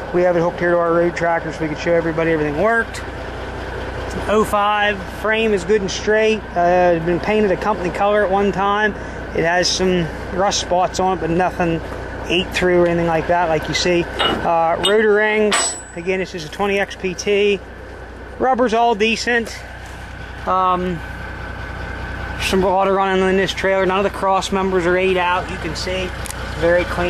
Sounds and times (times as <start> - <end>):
Speech: 0.0 - 3.0, 4.1 - 17.6, 18.4 - 19.7, 20.4 - 21.1, 22.4 - 27.1
Vehicle: 0.0 - 27.1.